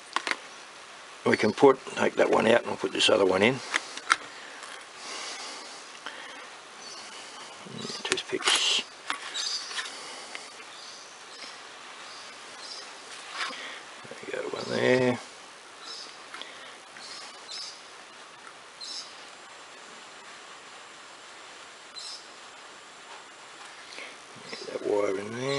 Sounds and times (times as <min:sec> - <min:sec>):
Speech: 0:01.2 - 0:03.6, 0:07.8 - 0:08.9, 0:14.1 - 0:15.3, 0:24.6 - 0:25.5.